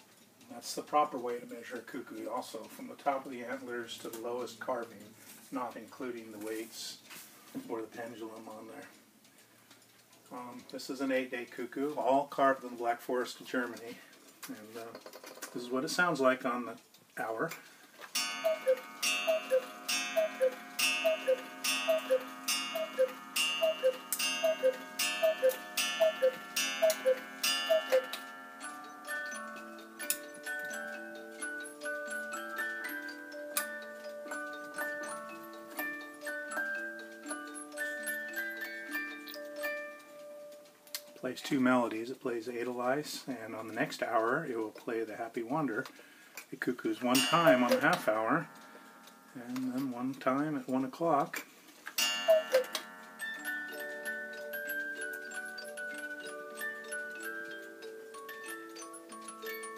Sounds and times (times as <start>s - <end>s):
Speech: 0.5s - 7.0s, 7.6s - 9.0s, 10.3s - 17.6s, 41.2s - 45.9s, 46.5s - 48.5s, 49.4s - 51.4s
Tick-tock: 15.8s - 41.2s, 47.1s - 59.7s.